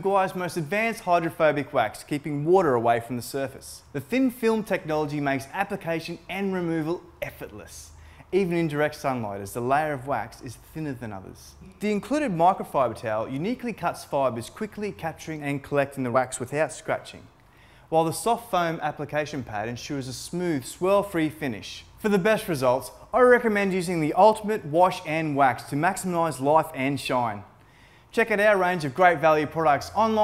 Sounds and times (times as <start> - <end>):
Speech: 0.0 - 17.3, 17.9 - 27.5, 28.1 - 30.2.